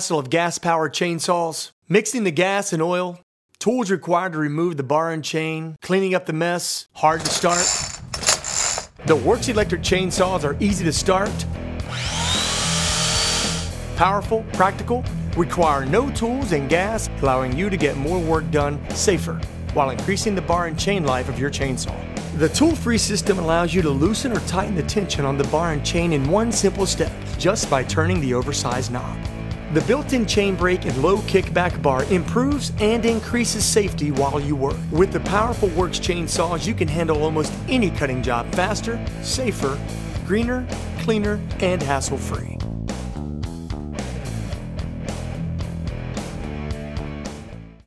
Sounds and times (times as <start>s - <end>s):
Speech: 0.0s - 7.7s, 9.0s - 11.4s, 14.0s - 42.6s
Power tool: 7.5s - 8.9s, 11.8s - 13.8s
Music: 9.0s - 47.8s
Chainsaw: 11.8s - 13.8s.